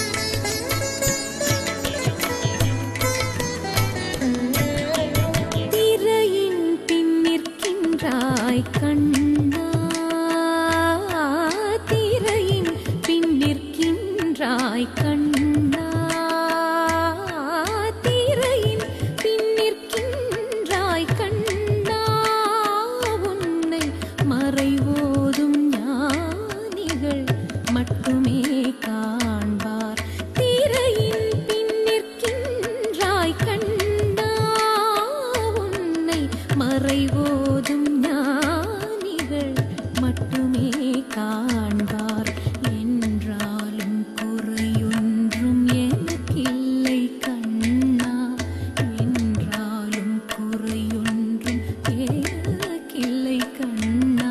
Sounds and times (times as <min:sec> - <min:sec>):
Carnatic music: 0:00.0 - 0:54.3.